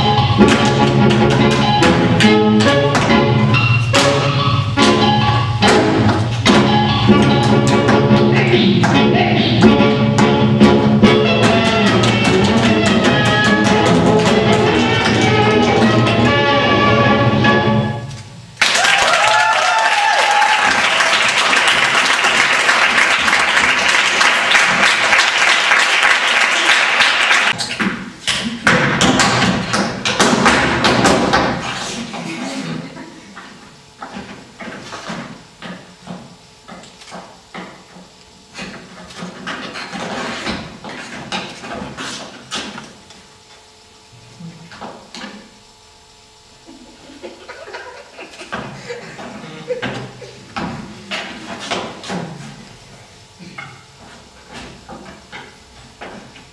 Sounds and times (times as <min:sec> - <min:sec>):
Inside, large room or hall: 0:00.0 - 0:56.5.